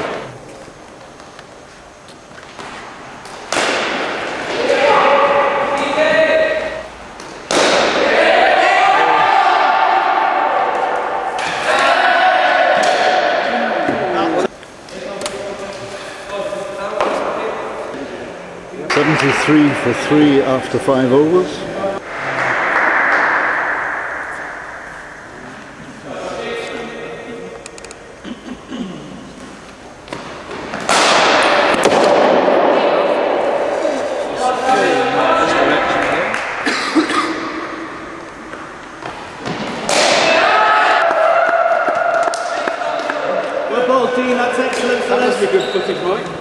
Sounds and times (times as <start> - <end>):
Inside, large room or hall: 0.0 - 46.4.